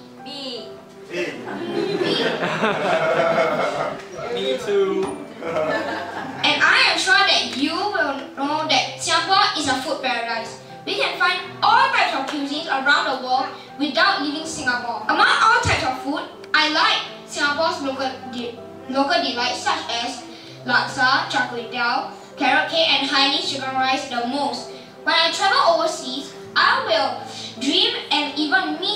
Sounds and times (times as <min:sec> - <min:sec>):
Music: 0:00.0 - 0:28.9
Child speech, kid speaking: 0:00.2 - 0:00.8, 0:01.5 - 0:02.4, 0:06.4 - 0:28.9
Narration, monologue: 0:06.4 - 0:28.9.